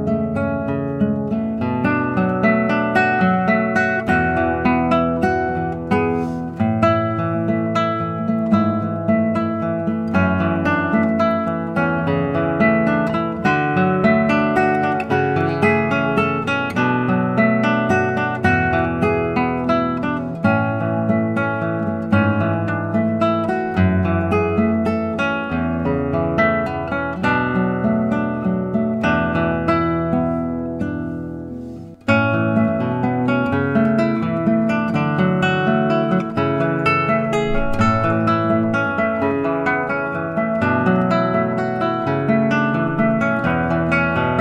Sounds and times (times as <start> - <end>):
Acoustic guitar: 0.0 - 44.4
Strum: 0.0 - 44.4.